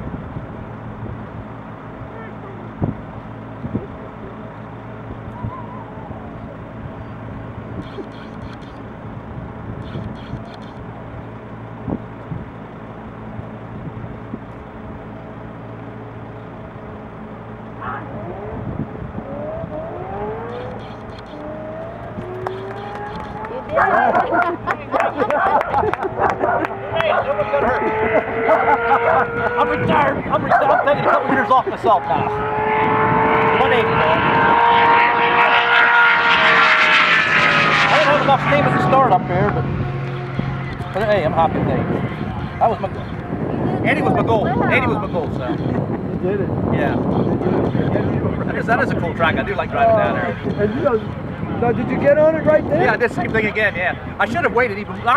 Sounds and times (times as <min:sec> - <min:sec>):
Vehicle: 0:00.0 - 0:55.1.